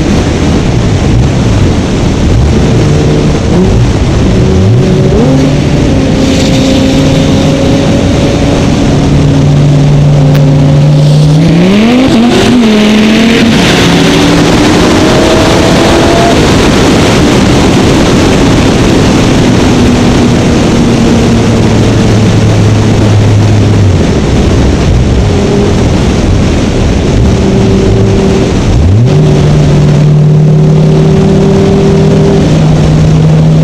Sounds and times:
Car: 0:00.0 - 0:33.6.

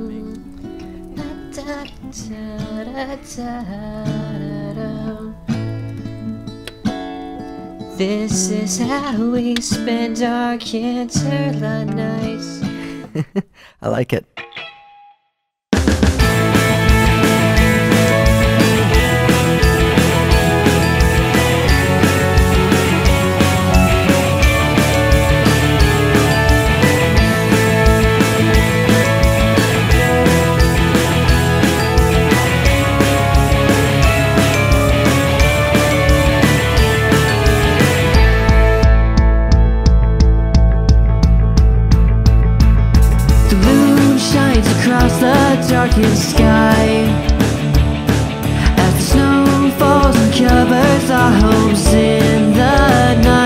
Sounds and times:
Music: 0:00.0 - 0:13.2, 0:14.4 - 0:53.4.

